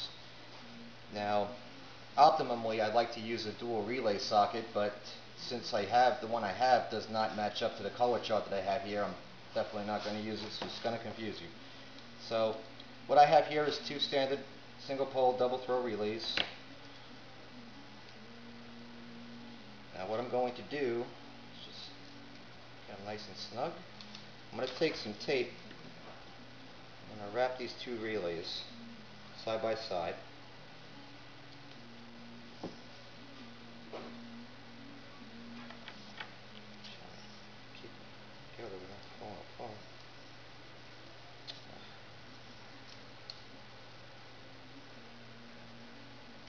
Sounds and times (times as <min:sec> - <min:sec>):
Speech: 0:01.1 - 0:01.6, 0:02.2 - 0:11.6, 0:24.5 - 0:25.6, 0:29.4 - 0:30.2, 0:38.6 - 0:39.9.